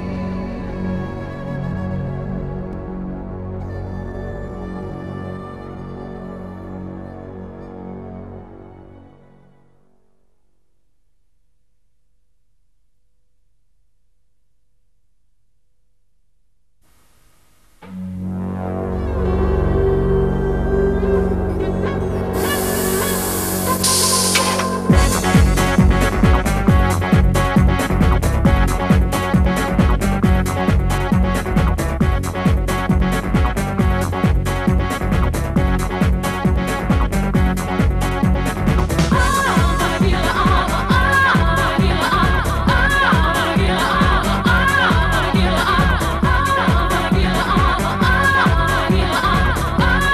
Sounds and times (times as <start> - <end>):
Disco: 22.0 - 50.1.